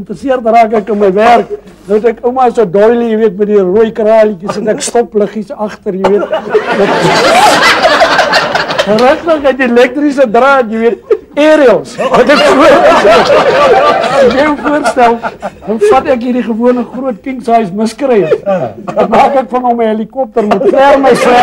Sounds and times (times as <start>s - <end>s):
Speech: 0.0s - 7.1s, 8.9s - 12.8s, 14.1s - 21.4s
Laughter: 6.0s - 9.0s, 10.9s - 16.0s, 18.1s - 19.4s, 20.4s - 21.4s.